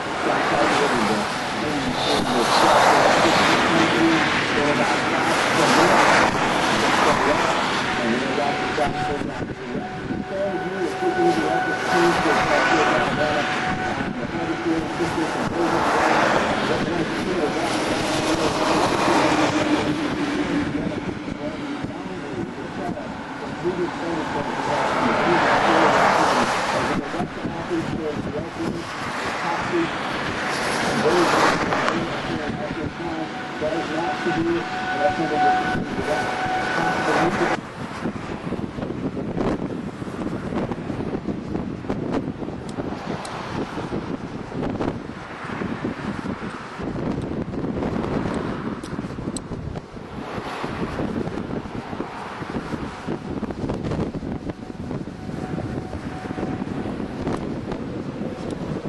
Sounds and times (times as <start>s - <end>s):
Speech: 0.2s - 6.3s, 6.9s - 19.3s, 20.6s - 30.0s, 31.0s - 37.6s.